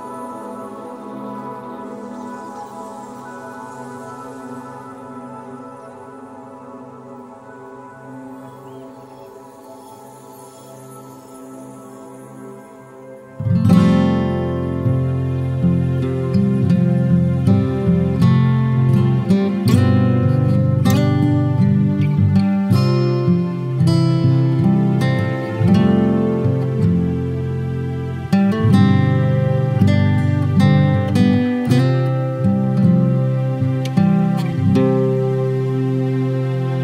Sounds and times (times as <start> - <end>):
Music: 0.0 - 36.8.